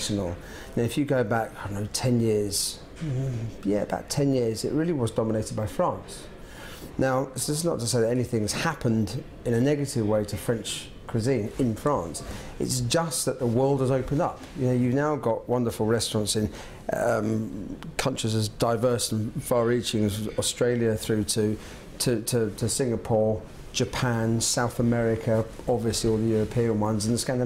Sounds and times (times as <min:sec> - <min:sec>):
Speech: 0:00.0 - 0:06.3, 0:07.0 - 0:27.4.